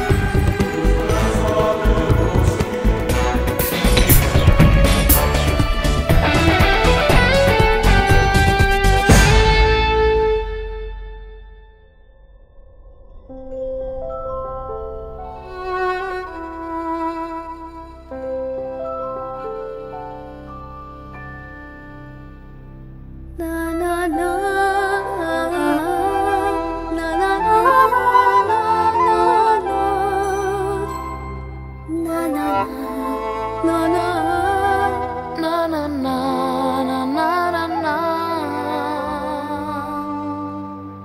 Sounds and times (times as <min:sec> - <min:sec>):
Music: 0:00.0 - 0:41.0.